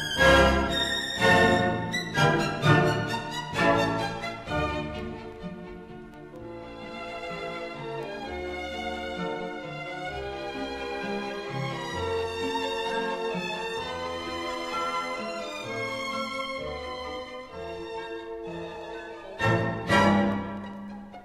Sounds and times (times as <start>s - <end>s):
Violin, fiddle: 0.0s - 21.2s.